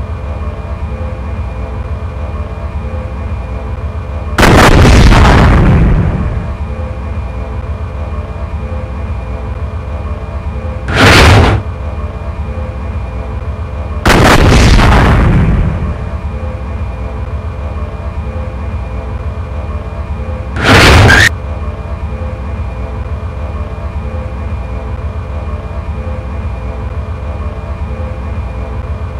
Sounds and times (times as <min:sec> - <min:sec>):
Artillery fire: 0:04.4 - 0:06.4, 0:10.9 - 0:11.7, 0:14.1 - 0:15.9, 0:20.6 - 0:21.3.